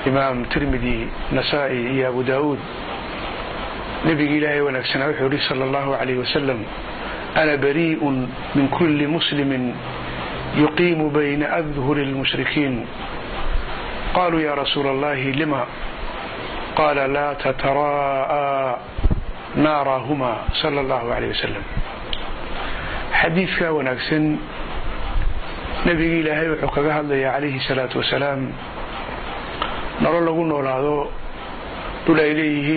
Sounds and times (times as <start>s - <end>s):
Speech: 0.0s - 2.7s, 4.0s - 6.7s, 7.4s - 9.9s, 10.5s - 13.0s, 14.1s - 15.8s, 16.8s - 18.9s, 19.5s - 21.8s, 23.1s - 24.5s, 25.8s - 28.6s, 30.0s - 31.2s, 32.0s - 32.7s.